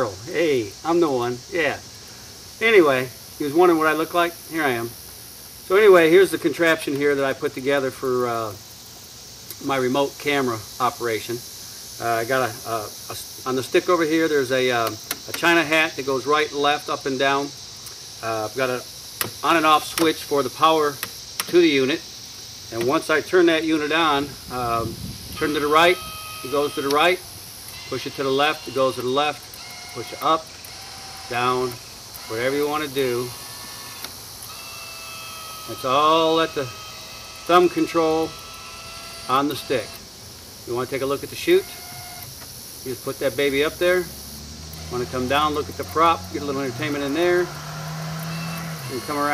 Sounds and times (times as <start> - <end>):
Speech: 0.0 - 1.8, 2.6 - 4.9, 5.7 - 8.6, 9.6 - 11.4, 12.0 - 17.6, 18.2 - 18.8, 19.4 - 22.0, 22.7 - 27.2, 27.9 - 29.4, 30.0 - 30.4, 31.3 - 33.3, 35.7 - 36.7, 37.5 - 38.3, 39.3 - 40.0, 40.7 - 41.8, 42.9 - 44.1, 44.9 - 47.5, 48.8 - 49.3.